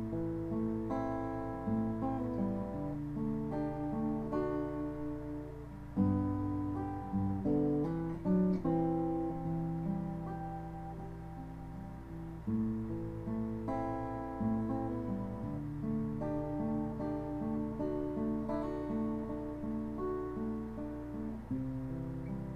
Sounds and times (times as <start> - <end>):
Acoustic guitar: 0.0 - 22.5.